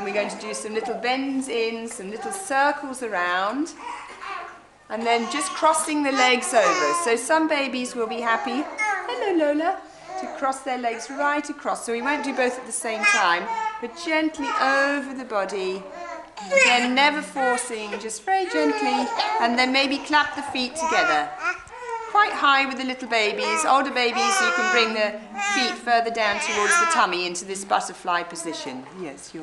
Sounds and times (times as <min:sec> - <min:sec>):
Speech: 0:00.0 - 0:03.8, 0:04.9 - 0:21.4, 0:22.1 - 0:29.4.